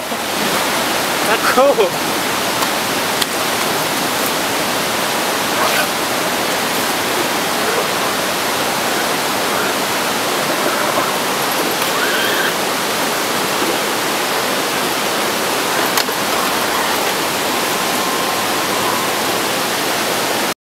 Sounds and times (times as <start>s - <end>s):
Waterfall: 0.0s - 20.6s.